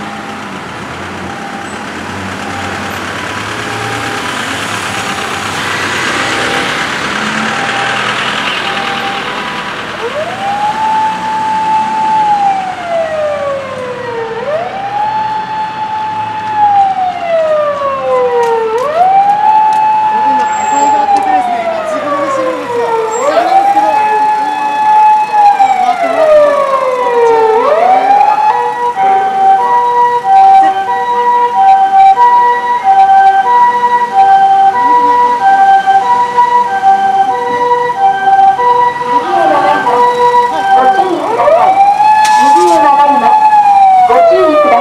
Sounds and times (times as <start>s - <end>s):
Siren: 0.0s - 0.6s, 1.2s - 44.8s
Emergency vehicle: 0.0s - 44.8s.